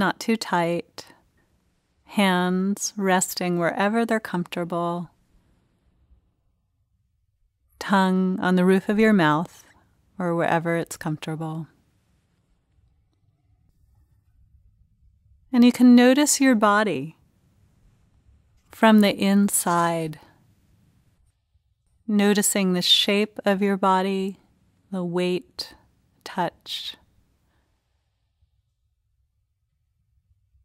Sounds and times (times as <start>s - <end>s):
Speech: 0.0s - 1.1s, 2.1s - 5.1s, 7.8s - 9.6s, 10.2s - 11.7s, 15.6s - 17.2s, 18.8s - 20.3s, 22.1s - 24.4s, 25.0s - 27.0s.